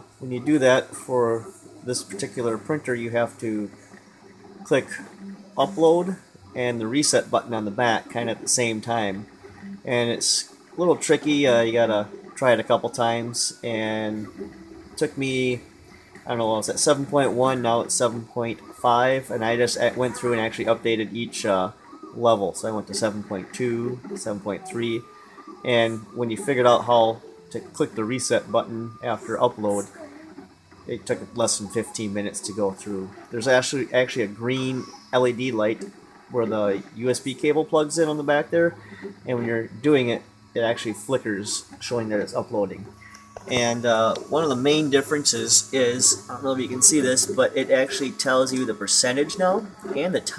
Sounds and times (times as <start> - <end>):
Speech: 0.2 - 3.8, 4.6 - 9.2, 9.9 - 14.3, 15.0 - 15.6, 16.3 - 25.0, 25.7 - 30.0, 30.9 - 42.9, 43.5 - 50.3.